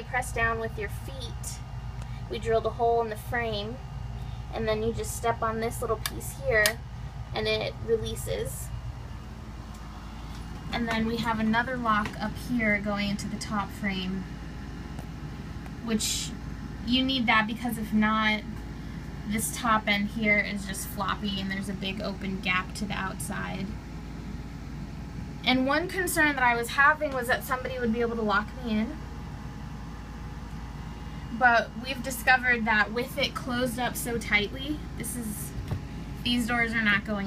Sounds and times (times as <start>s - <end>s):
Speech: 0.0s - 1.6s, 2.3s - 3.8s, 4.5s - 8.8s, 10.7s - 14.3s, 15.8s - 18.5s, 19.3s - 23.8s, 25.4s - 29.0s, 31.4s - 35.6s, 36.2s - 37.2s.